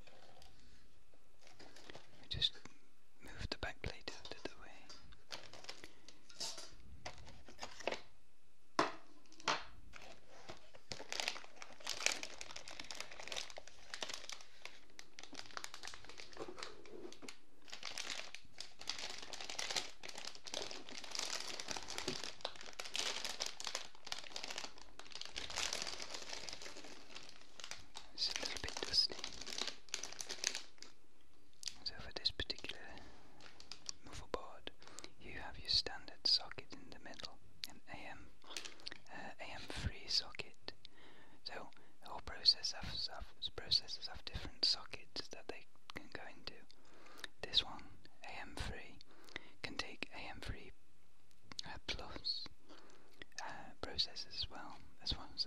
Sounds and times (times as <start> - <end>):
Crumpling, crinkling: 0.0 - 0.8, 1.4 - 2.5, 4.0 - 8.1, 9.2 - 31.0, 31.6 - 35.2, 38.4 - 40.6
Inside, small room: 0.0 - 55.4.